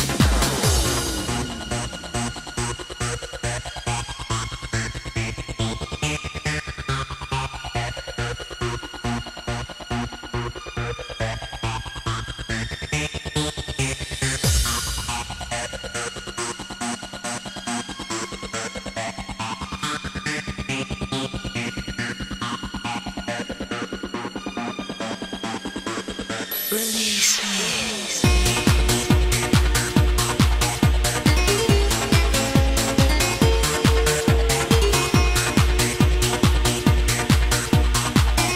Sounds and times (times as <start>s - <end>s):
Techno: 0.0s - 38.5s
Trance music: 0.0s - 38.5s.